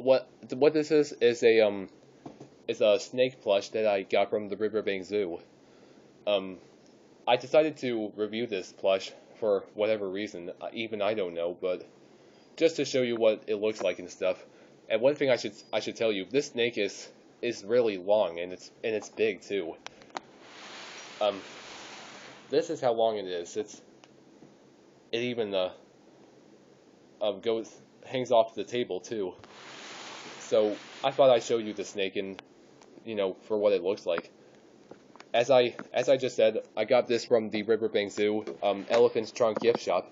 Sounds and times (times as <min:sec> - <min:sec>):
Speech: 0:00.0 - 0:01.9, 0:02.7 - 0:05.5, 0:06.3 - 0:06.6, 0:07.3 - 0:11.9, 0:12.6 - 0:19.8, 0:21.2 - 0:21.5, 0:22.5 - 0:23.9, 0:25.1 - 0:25.8, 0:27.2 - 0:29.4, 0:30.4 - 0:32.4, 0:33.0 - 0:34.3, 0:35.3 - 0:40.1
Inside, small room: 0:00.0 - 0:40.1.